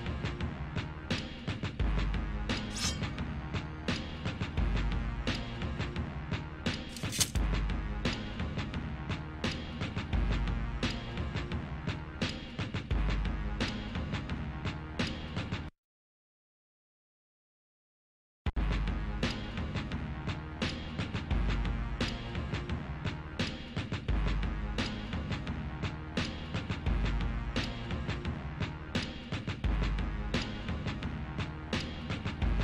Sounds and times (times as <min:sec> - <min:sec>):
Music: 0:00.0 - 0:15.7, 0:18.5 - 0:32.6.